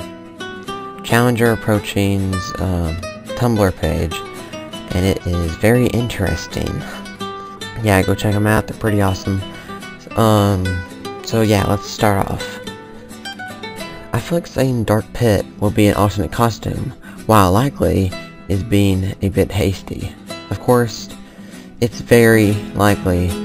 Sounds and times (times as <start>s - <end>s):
Music: 0.0s - 23.4s
Speech: 1.0s - 4.3s, 4.9s - 7.0s, 7.8s - 12.6s, 14.1s - 21.2s, 21.8s - 23.4s.